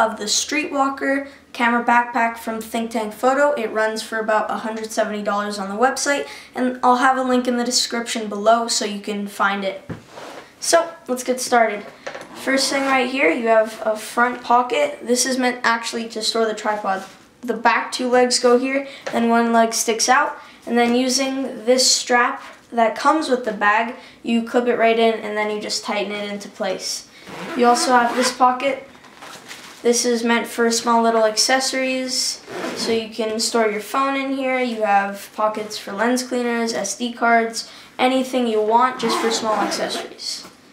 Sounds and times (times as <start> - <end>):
Speech: 0.0 - 9.9, 10.6 - 28.9, 29.8 - 40.5.